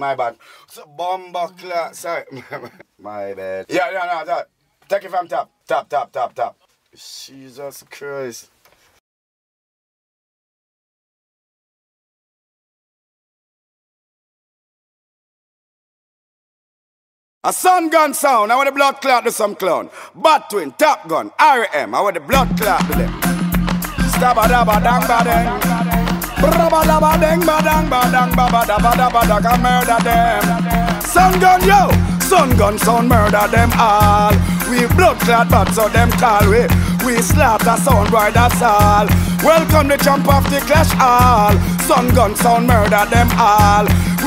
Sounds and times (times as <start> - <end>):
Speech: 0.0 - 8.5, 17.5 - 22.4
Music: 22.3 - 44.2.